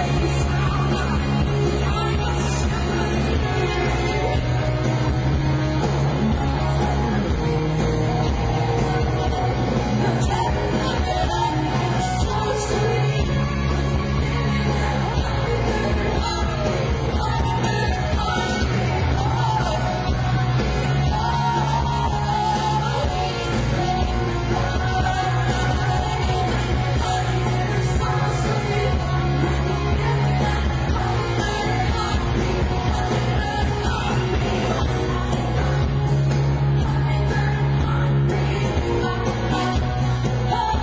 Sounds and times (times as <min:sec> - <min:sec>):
Rock music: 0:00.0 - 0:40.8
Singing: 0:00.0 - 0:40.8.